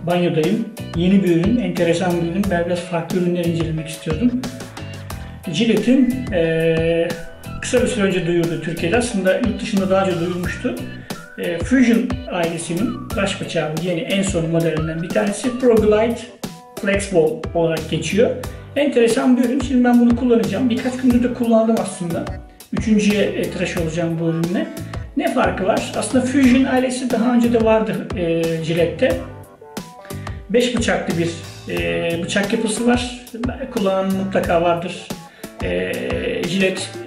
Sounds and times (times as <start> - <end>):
Speech: 0.0 - 4.4, 5.5 - 29.3, 30.5 - 37.0
Music: 0.0 - 37.0.